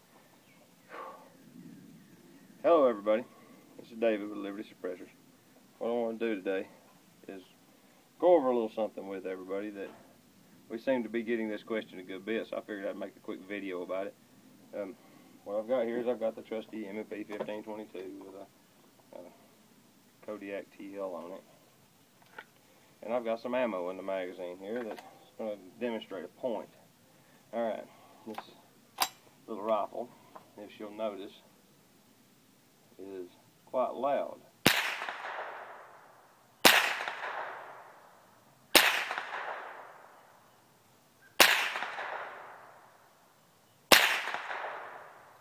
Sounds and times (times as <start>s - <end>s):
Speech: 2.6s - 5.2s, 5.8s - 7.6s, 8.2s - 10.1s, 10.7s - 18.5s, 19.1s - 19.4s, 20.2s - 21.5s, 23.0s - 26.8s, 27.5s - 28.6s, 29.5s - 31.5s, 33.0s - 34.5s.